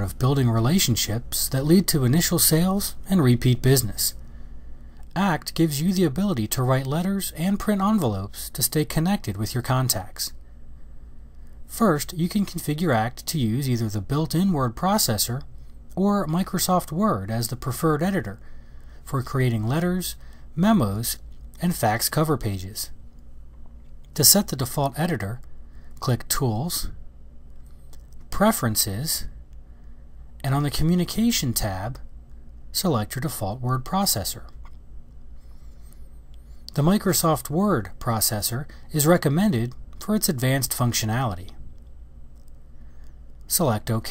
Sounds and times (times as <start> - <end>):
Speech: 0.0 - 4.2, 5.1 - 10.4, 11.7 - 18.4, 19.0 - 23.0, 24.1 - 27.0, 28.3 - 29.4, 30.4 - 32.1, 32.7 - 34.6, 36.7 - 41.6, 43.5 - 44.1.